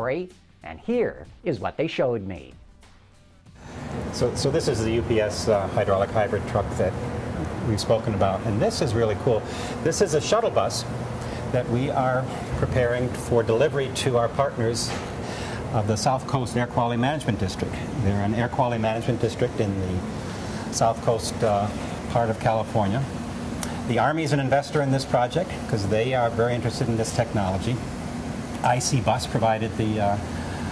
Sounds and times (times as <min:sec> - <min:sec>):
Speech: 0:00.0 - 0:02.6, 0:04.2 - 0:10.9, 0:11.6 - 0:15.0, 0:15.7 - 0:20.0, 0:20.7 - 0:23.1, 0:23.9 - 0:27.8, 0:28.6 - 0:30.2.